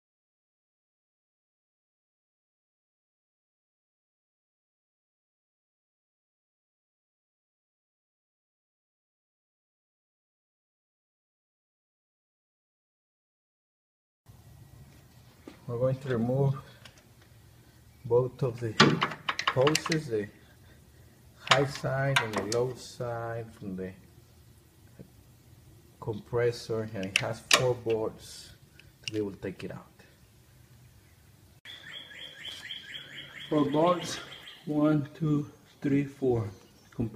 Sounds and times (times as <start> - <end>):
Bird: 30.1 - 37.1.